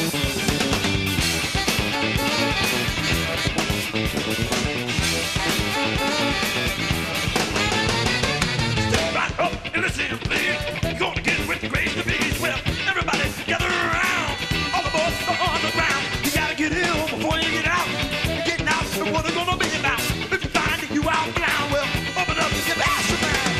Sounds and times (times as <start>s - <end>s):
Funk: 0.0s - 23.5s
Rhythm and blues: 0.0s - 23.5s.